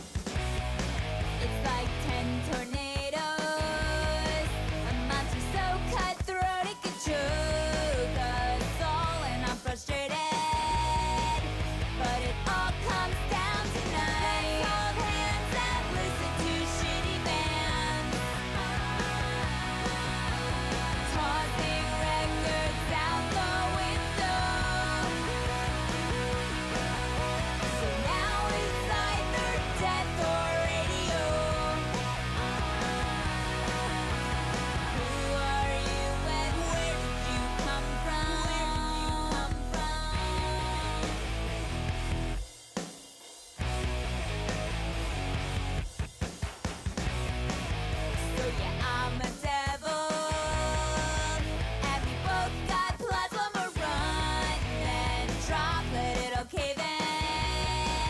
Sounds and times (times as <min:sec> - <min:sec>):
Rock and roll: 0:00.0 - 0:58.1.